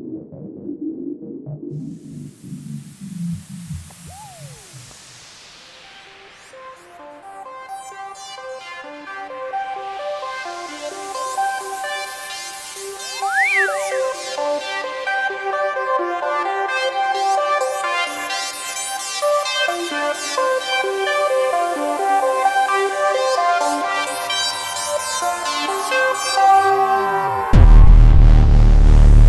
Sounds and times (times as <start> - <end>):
Music: 0.0 - 29.2.